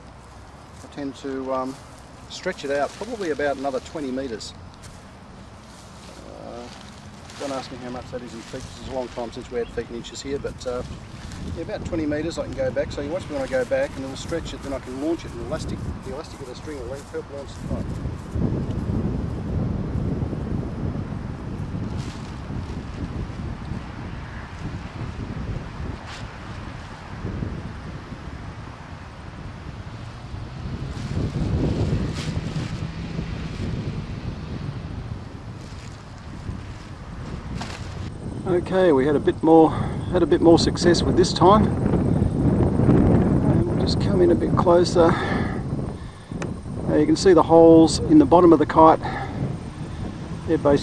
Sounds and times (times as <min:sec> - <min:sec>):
Outside, urban or manmade: 0:00.0 - 0:50.8
Speech: 0:00.8 - 0:04.6, 0:06.2 - 0:06.8, 0:07.4 - 0:10.9, 0:11.6 - 0:17.9, 0:38.4 - 0:41.7, 0:43.4 - 0:45.4, 0:46.9 - 0:49.3, 0:50.5 - 0:50.8.